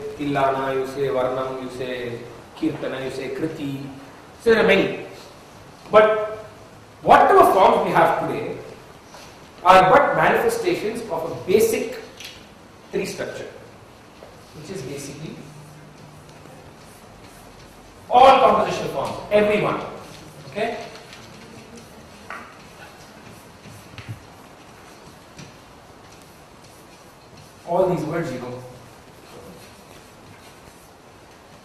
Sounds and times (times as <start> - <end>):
Male speech, man speaking: 0.0 - 5.2, 5.9 - 6.4, 7.0 - 8.7, 9.6 - 12.1, 12.9 - 13.6, 14.6 - 15.5, 18.1 - 21.0, 27.7 - 28.8.